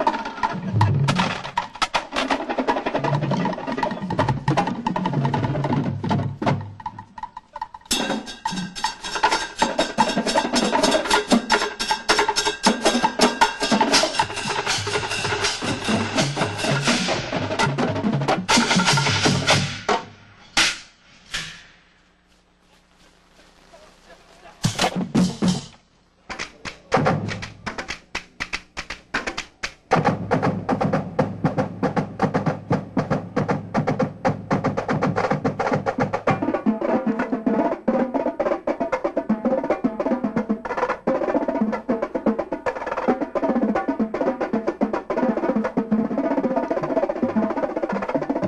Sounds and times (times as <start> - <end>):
Music: 0.0 - 21.8, 24.6 - 48.4.